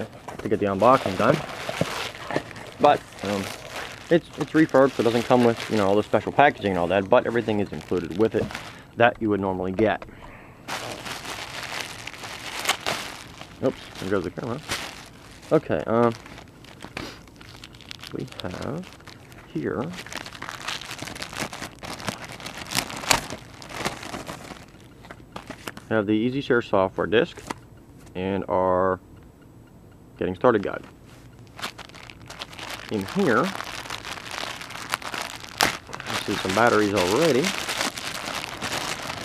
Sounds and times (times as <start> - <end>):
Speech: 0.0 - 1.4, 2.8 - 3.5, 4.1 - 10.0, 13.6 - 14.6, 15.5 - 16.2, 18.1 - 18.9, 19.5 - 20.0, 25.9 - 27.4, 28.1 - 29.0, 30.2 - 30.9, 32.9 - 33.6, 36.1 - 37.6.